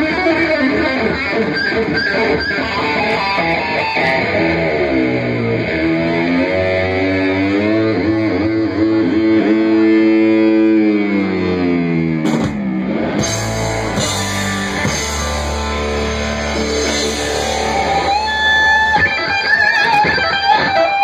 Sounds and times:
Guitar: 0.0s - 21.0s.

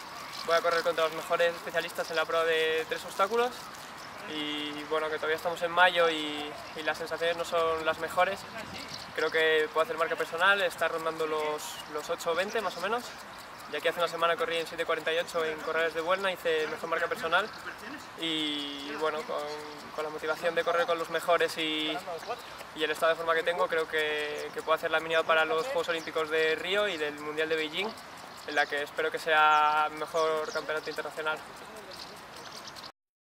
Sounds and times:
Outside, urban or manmade: 0.0s - 33.0s
Speech: 0.4s - 32.4s.

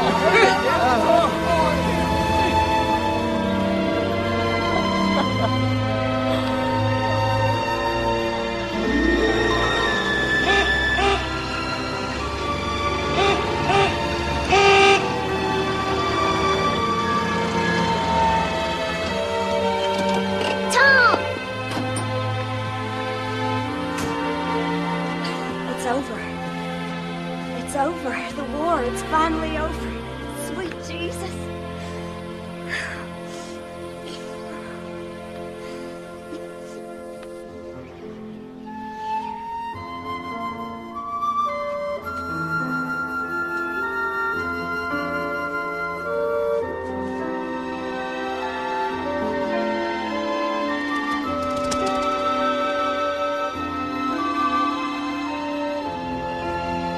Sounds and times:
Music: 0.0s - 56.9s.

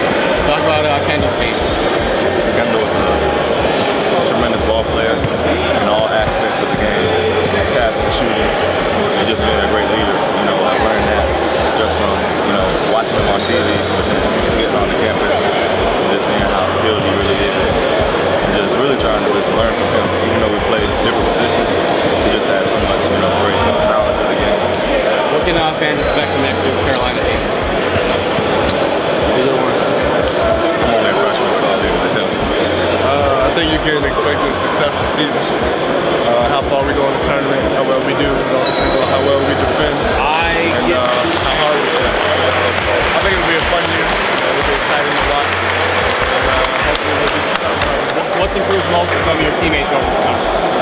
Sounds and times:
Speech: 0.0s - 28.3s, 29.2s - 35.6s, 36.2s - 50.8s
Music: 0.0s - 50.8s.

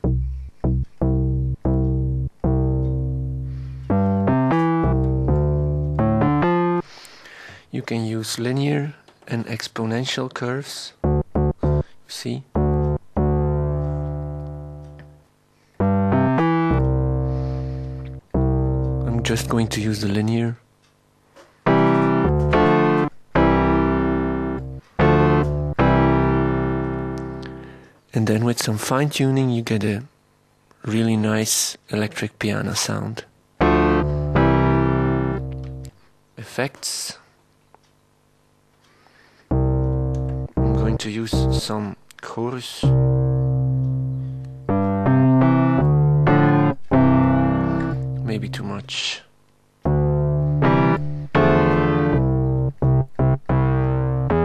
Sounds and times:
Synthesizer: 0.0s - 7.2s, 11.0s - 20.2s, 21.7s - 27.9s, 33.6s - 36.0s, 39.5s - 41.9s, 42.8s - 48.8s, 49.8s - 54.4s
Electric piano: 0.0s - 7.4s, 11.0s - 20.2s, 21.6s - 27.9s, 33.6s - 36.0s, 39.5s - 41.9s, 42.8s - 48.8s, 49.8s - 54.4s
Speech: 7.7s - 11.0s, 12.1s - 12.5s, 19.0s - 20.6s, 28.1s - 30.1s, 30.8s - 33.3s, 36.4s - 37.3s, 40.6s - 43.0s, 48.2s - 49.3s.

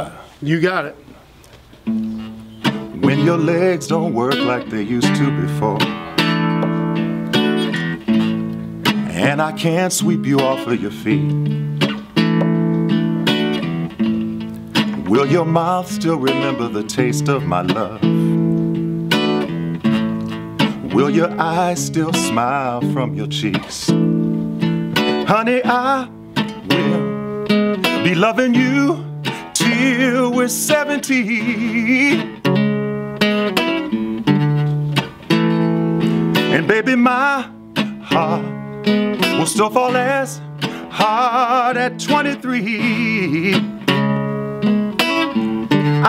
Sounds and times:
Music: 1.8s - 46.0s
Male singing: 3.0s - 5.9s, 9.0s - 11.3s, 15.0s - 18.2s, 20.8s - 24.0s, 25.3s - 26.1s, 26.7s - 27.2s, 28.0s - 32.4s, 36.5s - 38.6s, 39.3s - 43.7s.

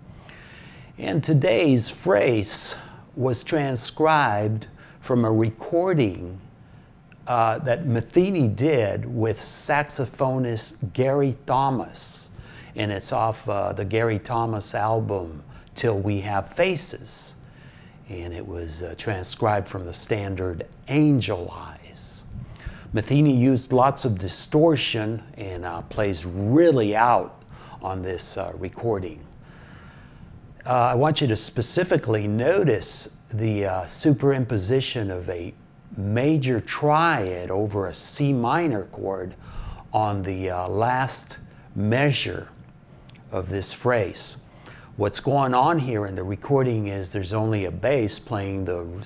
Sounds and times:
Speech: 1.0s - 6.5s, 7.2s - 17.4s, 18.0s - 22.3s, 22.9s - 29.4s, 30.6s - 42.6s, 43.2s - 49.0s.

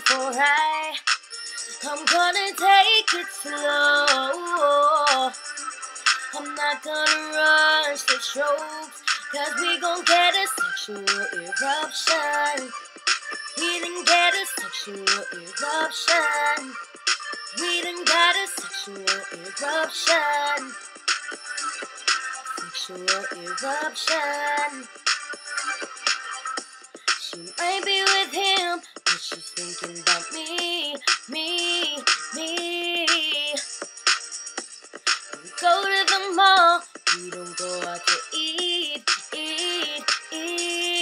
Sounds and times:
Music: 0.0s - 41.0s.

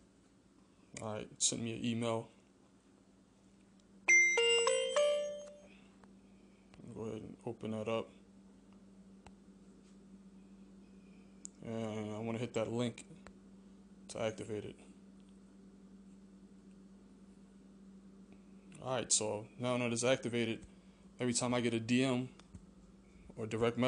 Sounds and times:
Inside, small room: 0.0s - 23.8s
Speech: 1.0s - 2.4s, 6.8s - 8.2s, 11.6s - 13.1s, 14.1s - 14.9s, 18.8s - 20.6s, 21.2s - 22.4s, 23.4s - 23.8s
Music: 4.1s - 5.7s.

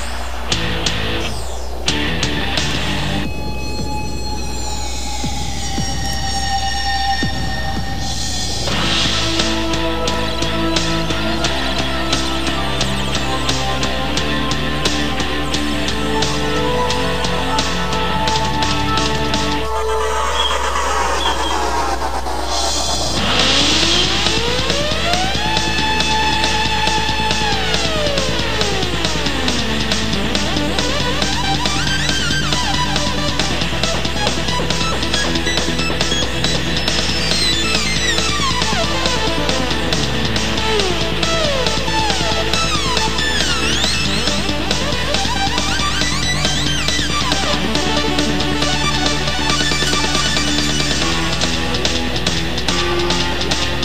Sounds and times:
Music: 0.5s - 21.6s, 23.2s - 53.8s.

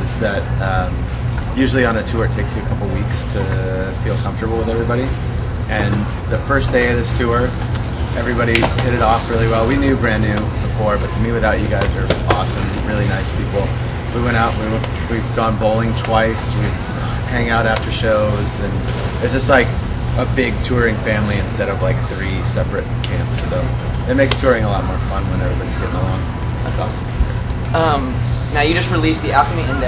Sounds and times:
Speech: 1.6s - 7.6s, 8.2s - 27.0s.

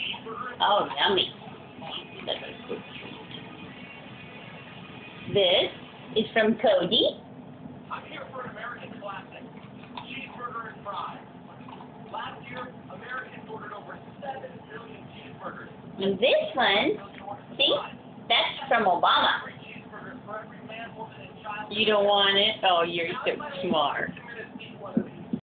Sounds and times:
Speech: 0.0s - 3.4s, 7.9s - 11.3s, 12.1s - 25.4s.

